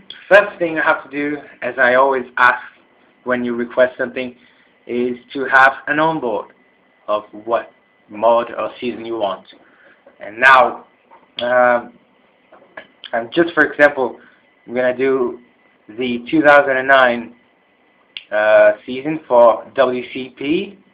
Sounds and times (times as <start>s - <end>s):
Speech: 0.1s - 6.5s, 7.1s - 9.6s, 10.2s - 11.9s, 12.7s - 17.4s, 18.2s - 20.8s.